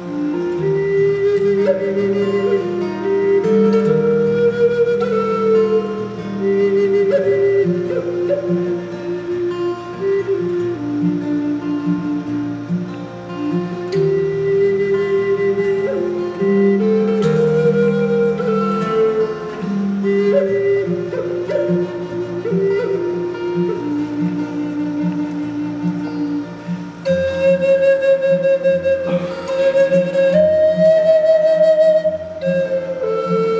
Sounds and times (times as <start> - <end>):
Acoustic guitar: 0.0 - 33.5
Strum: 0.0 - 33.5.